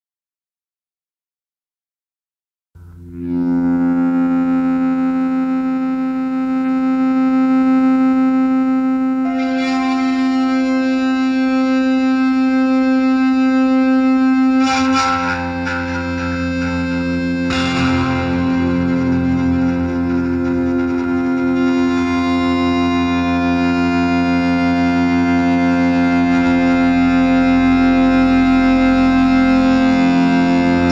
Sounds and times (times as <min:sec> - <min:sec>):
Distortion: 0:02.8 - 0:30.9
Music: 0:02.8 - 0:30.9.